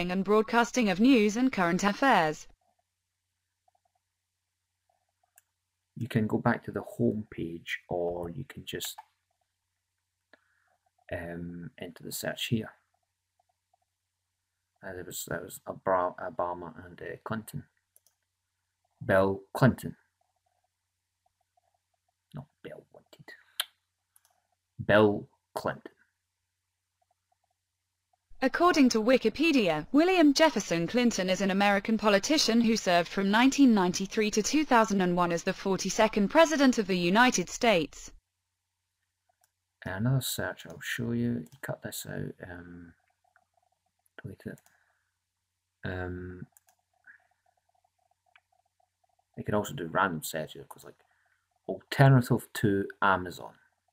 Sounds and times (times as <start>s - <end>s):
Speech: 0.0s - 2.5s, 6.0s - 9.0s, 11.1s - 12.7s, 14.8s - 17.7s, 19.0s - 20.0s, 24.8s - 25.9s, 28.4s - 38.1s, 39.8s - 42.9s, 44.2s - 44.6s, 45.9s - 46.5s, 49.4s - 50.9s, 51.7s - 53.5s.